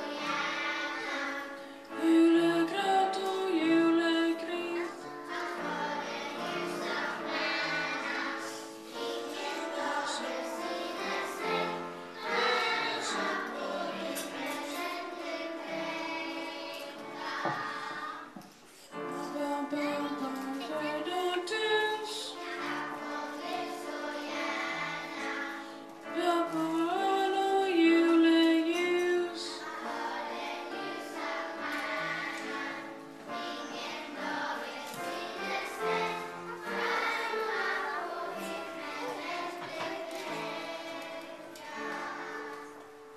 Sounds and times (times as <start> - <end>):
Choir: 0.0 - 18.4, 19.1 - 43.1.